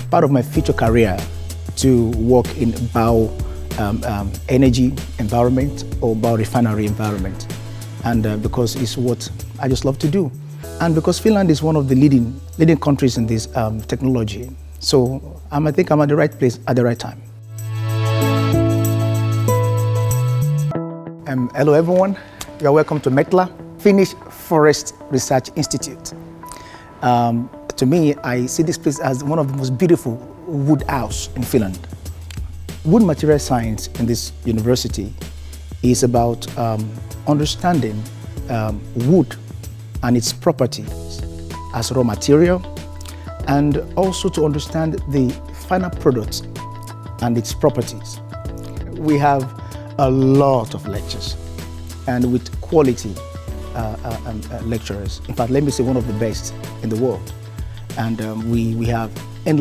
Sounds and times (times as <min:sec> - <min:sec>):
Music: 0:00.0 - 0:59.6
Speech: 0:00.1 - 0:17.3, 0:21.3 - 0:26.2, 0:27.0 - 0:31.9, 0:32.8 - 0:35.2, 0:35.8 - 0:39.4, 0:40.0 - 0:42.7, 0:43.4 - 0:46.5, 0:47.2 - 0:48.2, 0:48.9 - 0:51.4, 0:52.1 - 0:57.3, 0:58.0 - 0:59.6.